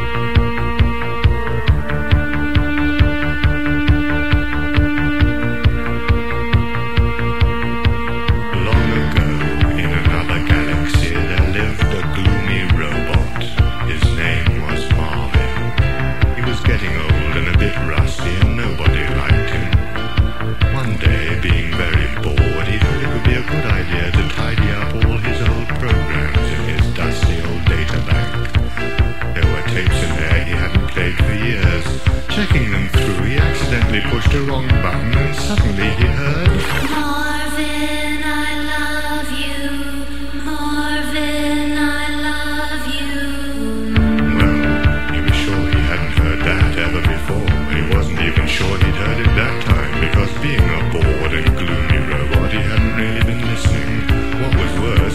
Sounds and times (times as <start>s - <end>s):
Music: 0.0s - 55.1s.